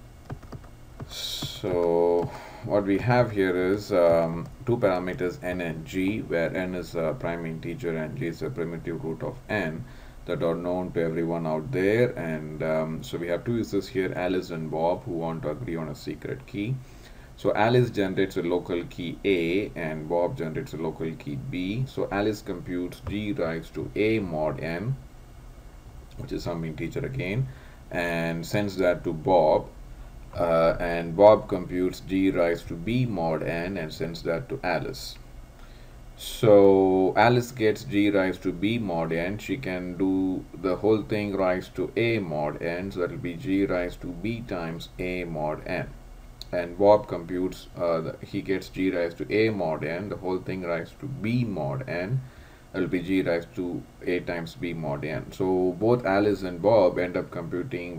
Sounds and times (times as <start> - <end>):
Speech: 1.1 - 16.8, 17.4 - 25.0, 26.2 - 29.8, 30.4 - 35.2, 36.2 - 52.2, 52.8 - 57.9.